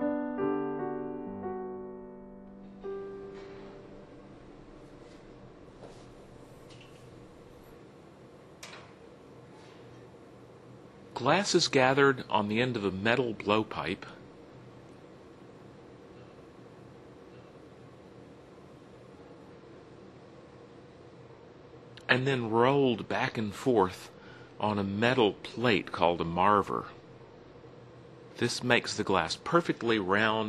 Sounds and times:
Speech: 11.2 - 14.2, 22.0 - 27.0, 28.4 - 30.4.

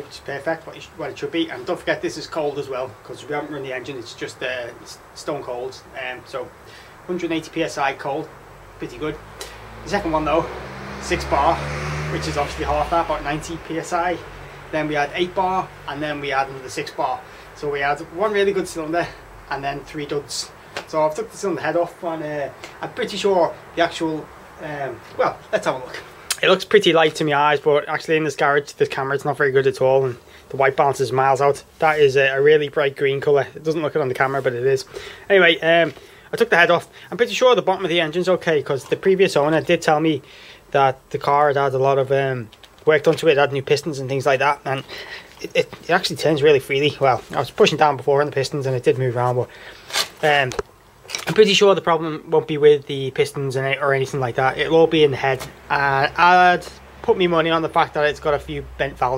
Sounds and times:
Speech: 0.0 - 9.2, 9.8 - 49.5, 50.2 - 59.1
Vehicle: 0.0 - 59.1.

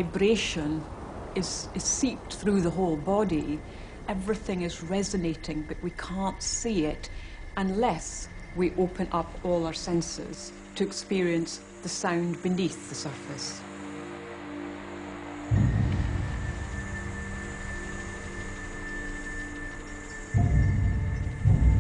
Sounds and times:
Speech: 0.0 - 13.6.

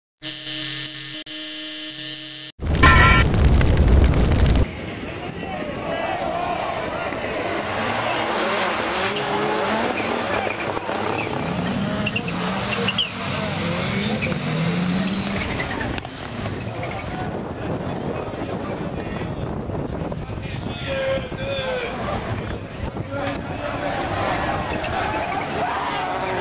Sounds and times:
Hum: 0.2 - 4.6.

